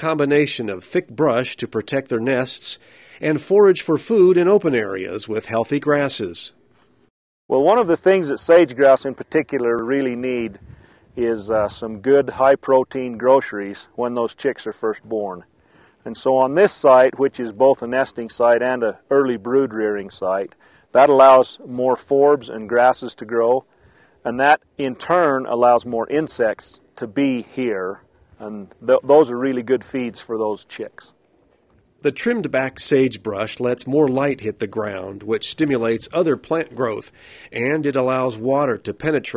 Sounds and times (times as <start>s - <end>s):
Speech: 0.0s - 6.6s, 7.5s - 10.6s, 11.2s - 23.6s, 24.2s - 31.2s, 32.0s - 39.3s.